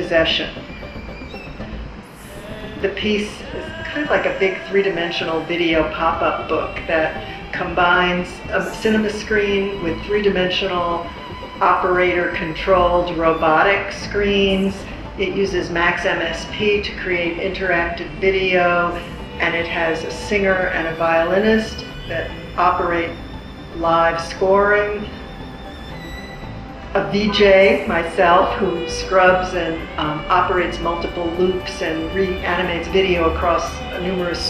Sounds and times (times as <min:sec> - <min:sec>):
Speech: 0:00.0 - 0:00.6, 0:02.8 - 0:23.2, 0:23.8 - 0:25.1, 0:27.0 - 0:34.4.